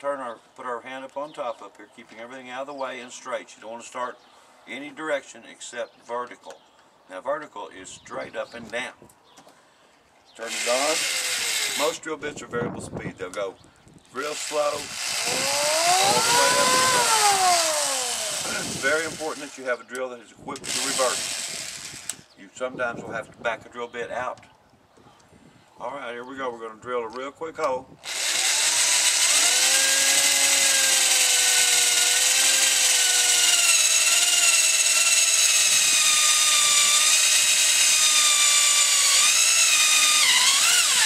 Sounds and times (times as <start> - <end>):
Drill: 10.4 - 12.0, 14.2 - 19.7, 20.6 - 22.3, 28.0 - 41.0.